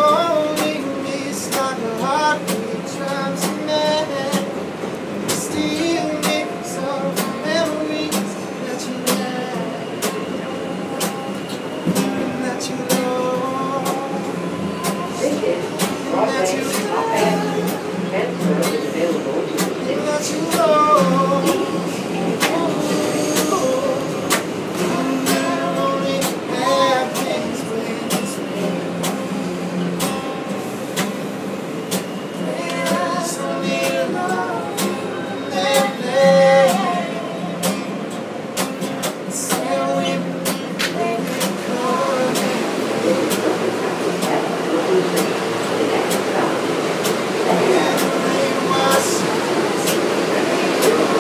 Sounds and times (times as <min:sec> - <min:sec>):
Music: 0:00.0 - 0:51.2.